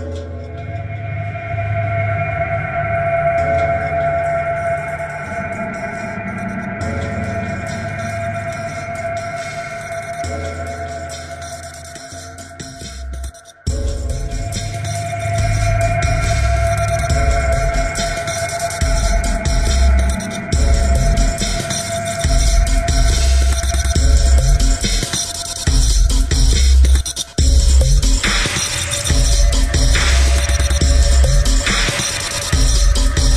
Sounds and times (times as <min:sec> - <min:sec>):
Dubstep: 0:00.0 - 0:33.3.